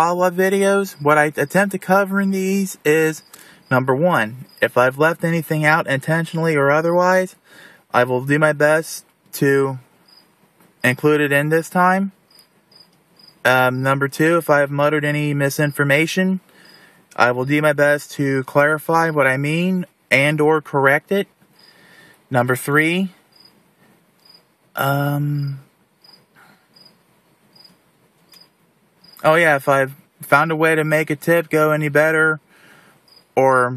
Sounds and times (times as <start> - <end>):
Speech: 0.0 - 9.8, 10.8 - 12.1, 13.5 - 16.4, 17.2 - 21.3, 22.3 - 23.2, 24.8 - 25.6, 29.2 - 32.4, 33.4 - 33.7
Outside, rural or natural: 0.0 - 33.7.